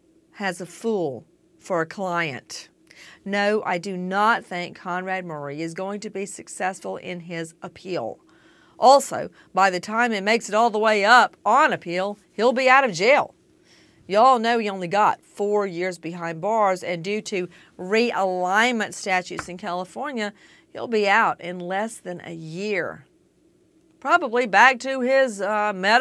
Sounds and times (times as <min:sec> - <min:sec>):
Speech: 0:00.4 - 0:02.7, 0:03.3 - 0:08.2, 0:08.8 - 0:13.3, 0:14.1 - 0:23.0, 0:24.0 - 0:26.0.